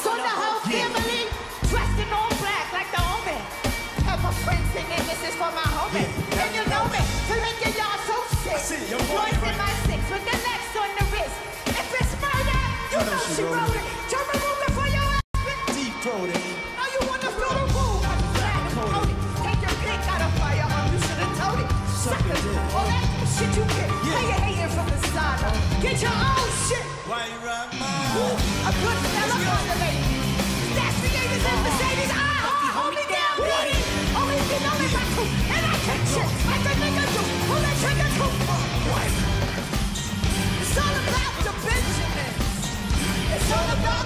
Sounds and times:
Music: 0.0s - 44.0s.

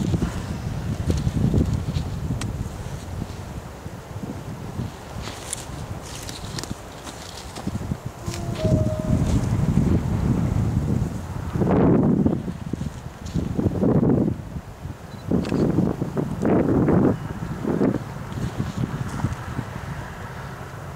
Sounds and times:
Rail transport: 0.0s - 20.9s.

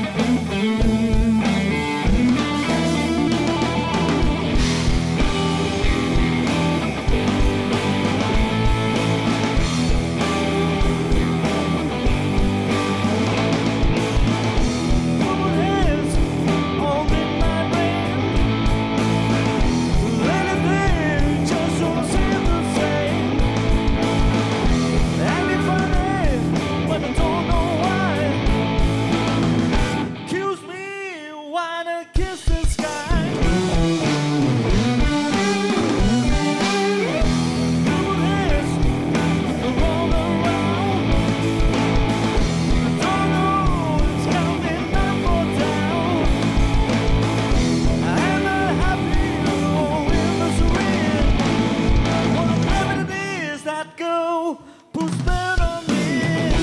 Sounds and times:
Music: 0.0s - 56.6s.

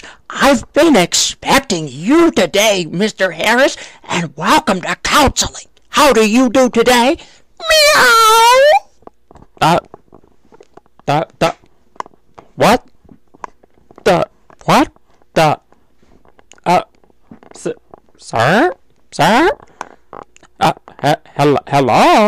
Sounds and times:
Speech: 0.3s - 8.8s, 9.6s - 9.9s, 11.0s - 11.6s, 12.6s - 12.9s, 14.0s - 15.6s, 16.6s - 16.9s, 17.5s - 19.6s, 20.6s - 22.2s.

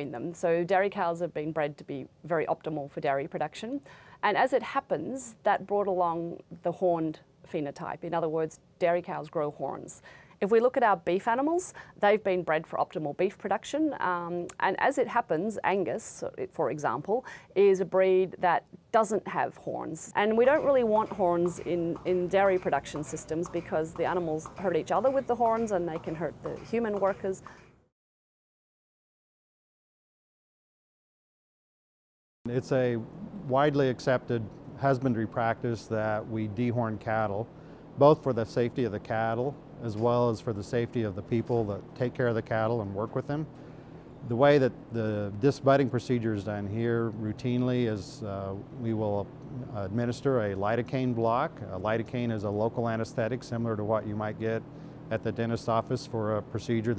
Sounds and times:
Speech: 0.0s - 27.4s, 32.5s - 37.4s, 38.0s - 43.5s, 44.3s - 56.9s.

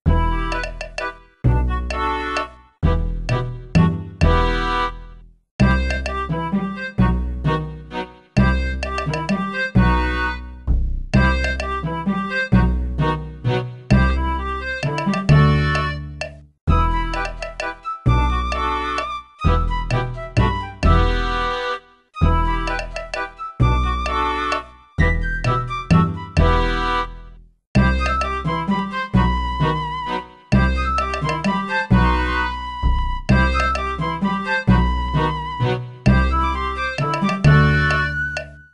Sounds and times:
Music: 0.1s - 38.7s.

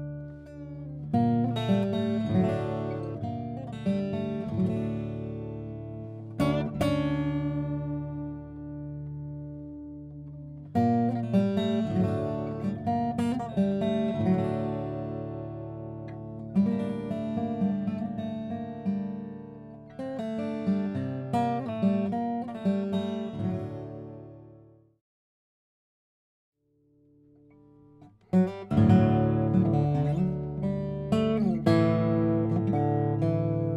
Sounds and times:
Acoustic guitar: 0.0s - 25.0s, 27.4s - 33.7s.

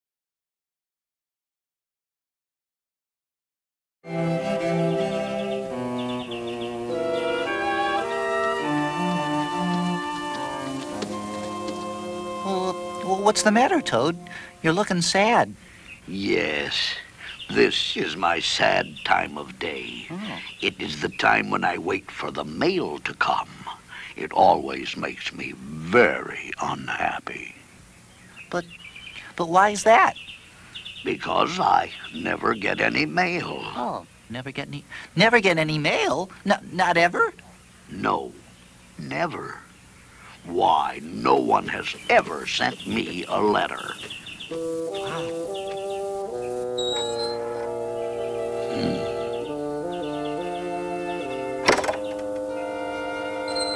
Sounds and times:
Speech: 12.5s - 27.6s, 28.5s - 28.7s, 31.1s - 38.4s, 39.0s - 39.7s, 40.4s - 44.0s.

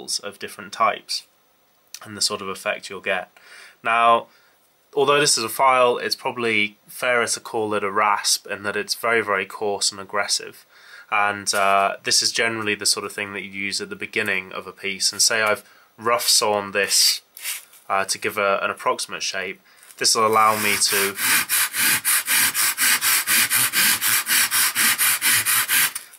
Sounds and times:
Speech: 0.0s - 1.3s, 2.0s - 4.3s, 5.0s - 17.3s, 17.9s - 21.2s.

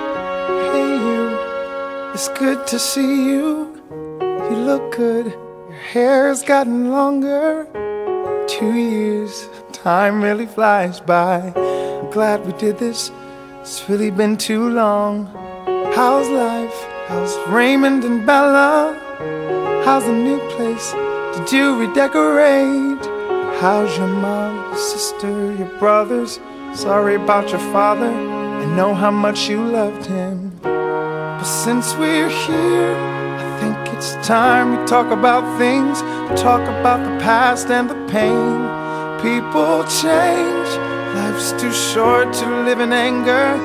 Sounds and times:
Music: 0.0s - 43.6s.

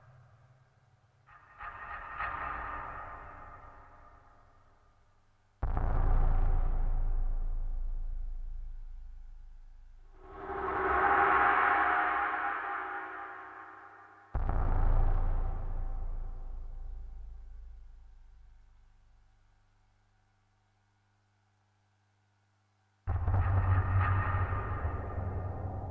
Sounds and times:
Sound effect: 10.2s - 16.8s.

